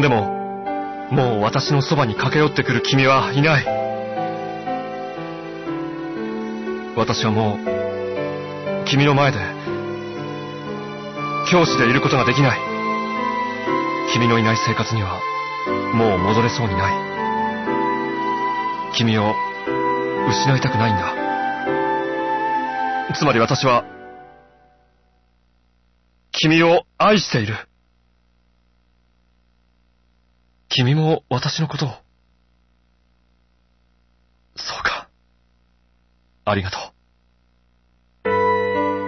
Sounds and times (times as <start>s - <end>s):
Speech: 0.0s - 0.3s, 1.1s - 3.7s, 7.0s - 7.6s, 8.9s - 9.6s, 11.5s - 12.6s, 14.1s - 15.2s, 15.9s - 17.0s, 18.9s - 19.4s, 20.3s - 21.2s, 23.1s - 23.8s, 26.3s - 27.7s, 30.7s - 32.0s, 34.6s - 35.1s, 36.4s - 37.0s
Music: 0.0s - 25.2s, 38.3s - 39.0s.